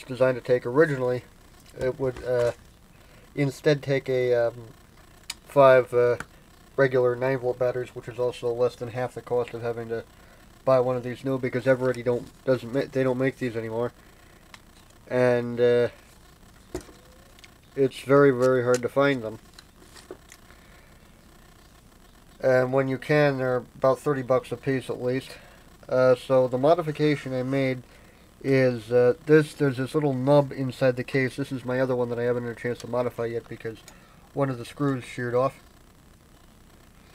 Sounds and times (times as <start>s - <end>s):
Speech: 0.0s - 2.6s, 3.4s - 4.7s, 5.5s - 10.1s, 10.7s - 14.0s, 15.1s - 16.0s, 17.8s - 19.4s, 22.4s - 27.8s, 28.4s - 33.8s, 34.4s - 35.6s.